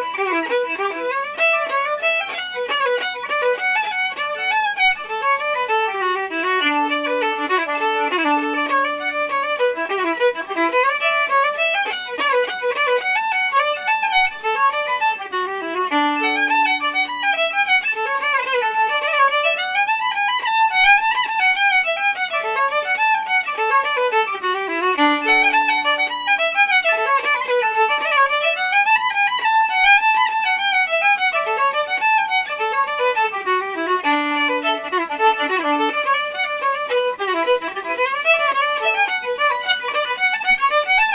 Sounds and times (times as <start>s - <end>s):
Violin, fiddle: 0.0s - 41.1s.